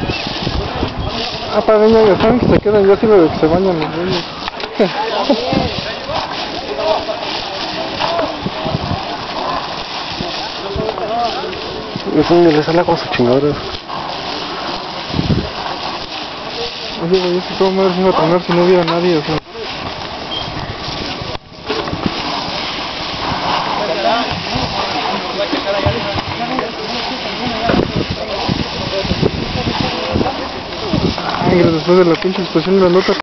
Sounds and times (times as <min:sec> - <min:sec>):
Speech: 0:00.5 - 0:13.7, 0:14.8 - 0:19.8, 0:23.6 - 0:33.2.